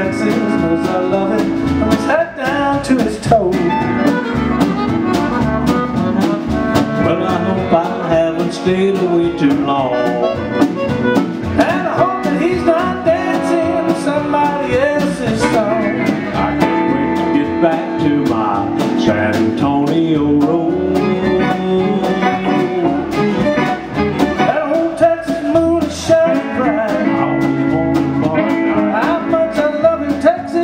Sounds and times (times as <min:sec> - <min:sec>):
Male singing: 0:00.0 - 0:03.8, 0:07.0 - 0:10.4, 0:11.6 - 0:23.2, 0:24.4 - 0:30.6
Music: 0:00.0 - 0:30.6.